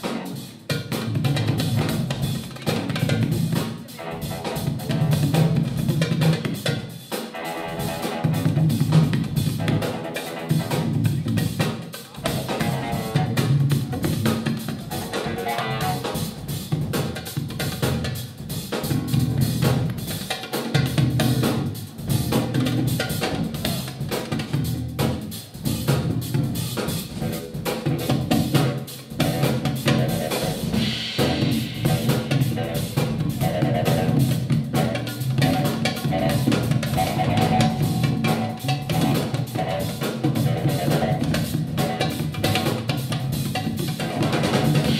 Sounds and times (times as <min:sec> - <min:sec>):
Percussion: 0:00.0 - 0:45.0.